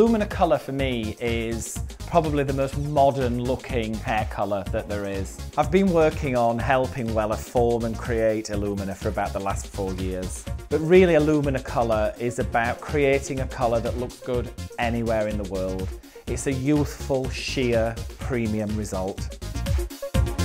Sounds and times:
Speech: 0.0s - 19.3s
Music: 0.0s - 20.4s.

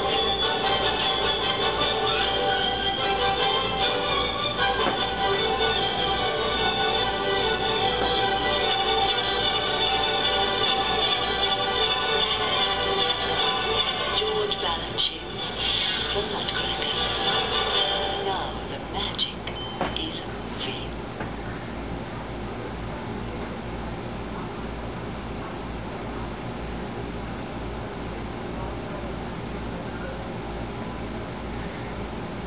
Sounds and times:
Speech: 14.1s - 17.0s, 17.9s - 21.0s, 28.4s - 30.5s.

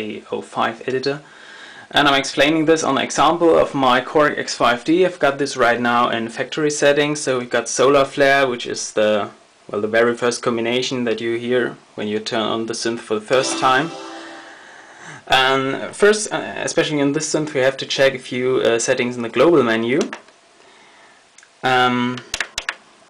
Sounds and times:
Speech: 0.0s - 1.3s, 1.9s - 14.0s, 15.3s - 20.2s, 21.6s - 22.3s
Music: 13.3s - 14.9s.

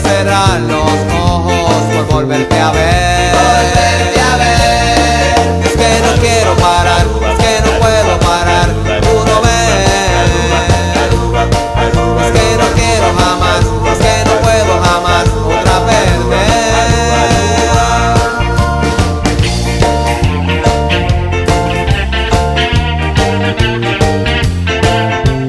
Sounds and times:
Music: 0.0s - 25.4s.

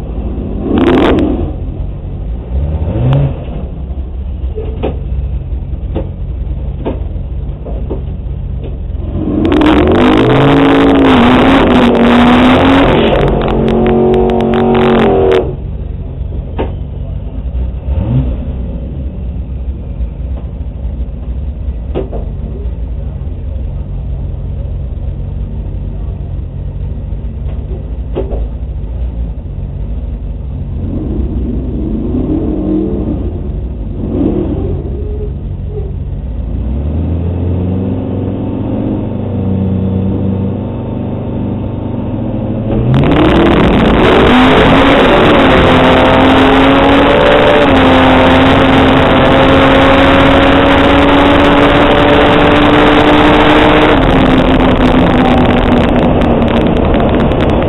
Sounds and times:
Car: 0.0s - 57.6s.

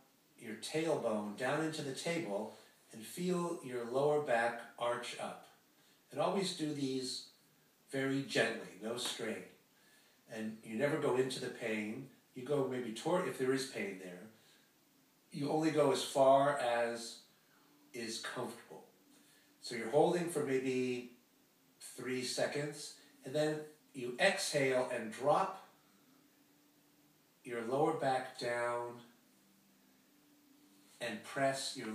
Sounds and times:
Speech: 0.0s - 9.6s, 10.3s - 14.4s, 15.3s - 17.3s, 17.9s - 18.9s, 19.6s - 21.2s, 21.8s - 25.8s, 27.4s - 29.2s, 31.0s - 31.9s.

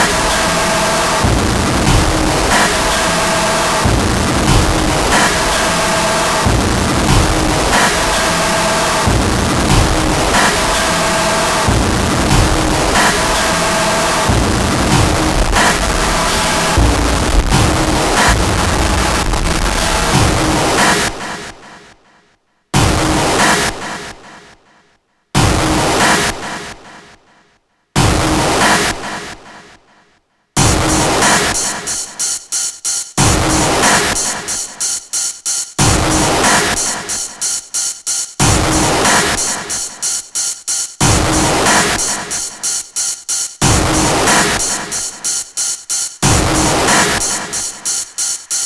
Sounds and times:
White noise: 0.0s - 21.3s.

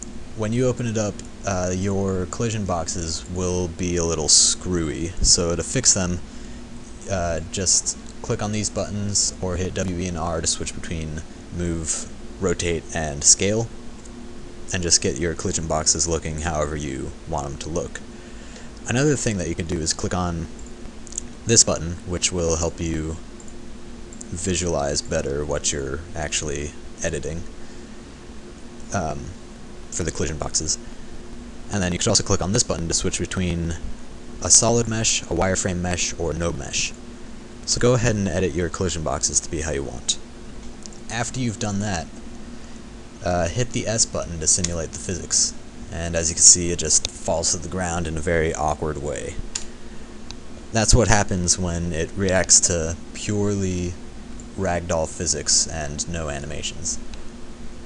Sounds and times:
Speech: 0.4s - 6.2s, 7.0s - 13.7s, 14.7s - 18.0s, 18.8s - 20.5s, 21.5s - 23.2s, 24.3s - 27.5s, 28.9s - 29.4s, 30.0s - 30.8s, 31.7s - 37.0s, 37.7s - 40.2s, 41.1s - 42.1s, 43.2s - 49.4s, 50.7s - 54.0s, 54.6s - 57.0s.

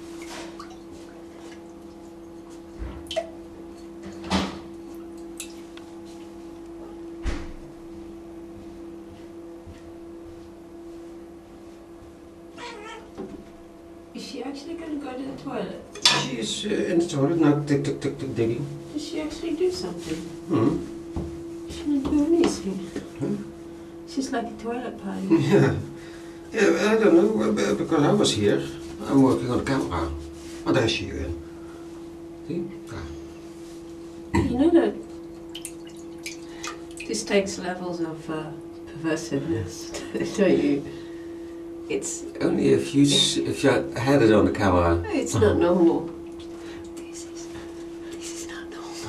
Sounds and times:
Speech: 14.2s - 20.8s, 26.6s - 31.4s, 41.9s - 46.1s.

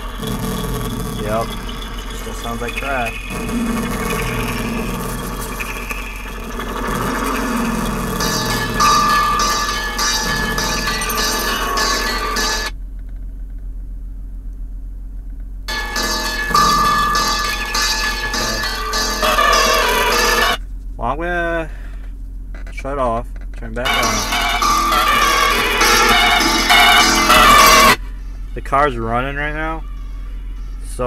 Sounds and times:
Speech: 2.3s - 3.2s, 21.0s - 21.8s, 22.7s - 24.2s, 28.6s - 29.8s, 30.8s - 31.0s
Music: 8.2s - 12.7s, 23.9s - 28.5s.

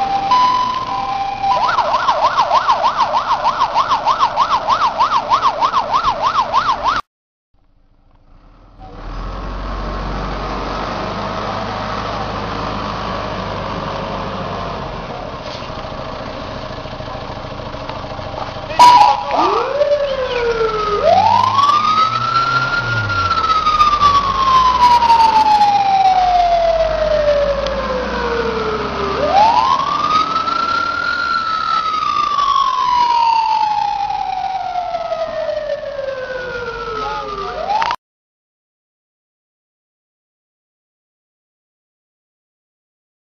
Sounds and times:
Police car (siren): 0.0s - 7.0s, 18.7s - 38.0s.

